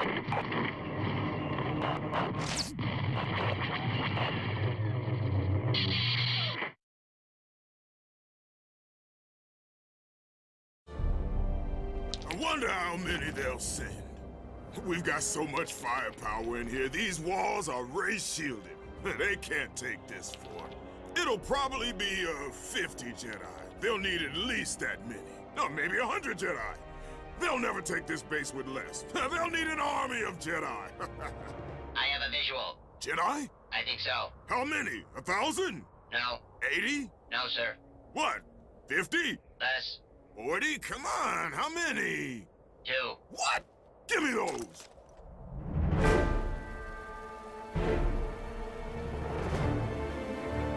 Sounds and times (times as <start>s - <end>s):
Music: 10.9s - 32.3s, 45.8s - 50.7s
Speech: 12.3s - 14.0s, 14.8s - 26.8s, 27.4s - 30.9s, 32.0s - 44.8s.